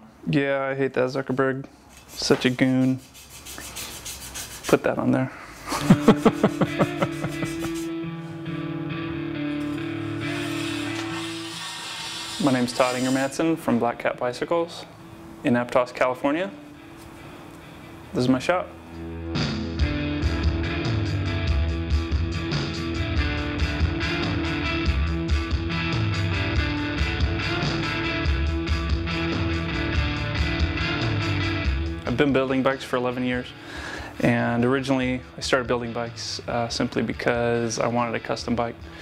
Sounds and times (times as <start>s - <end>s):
Speech: 0.2s - 3.0s, 4.7s - 5.4s, 12.4s - 16.6s, 18.2s - 18.7s, 32.1s - 33.5s, 34.2s - 38.8s
Music: 5.6s - 39.0s.